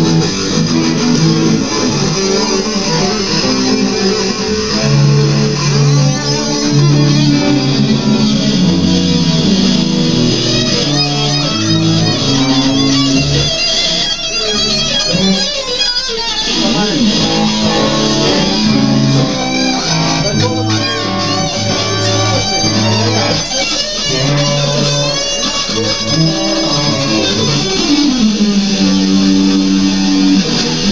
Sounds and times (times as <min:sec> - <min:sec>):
Strum: 0:00.0 - 0:15.8, 0:16.4 - 0:30.9
Bass guitar: 0:00.0 - 0:30.9.